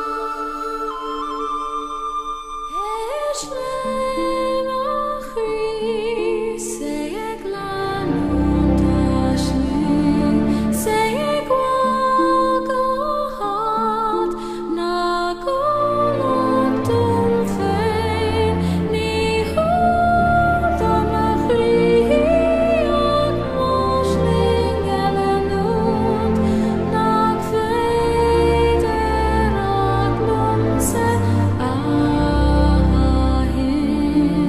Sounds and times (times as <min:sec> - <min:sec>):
Music: 0:00.0 - 0:34.4.